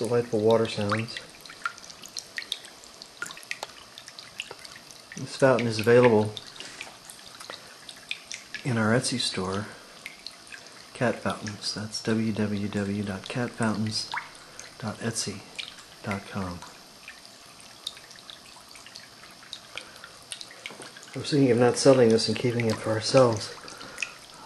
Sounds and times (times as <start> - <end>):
Speech: 0.0 - 1.2, 5.2 - 6.4, 8.6 - 9.8, 11.0 - 14.2, 14.8 - 16.7, 21.2 - 23.6.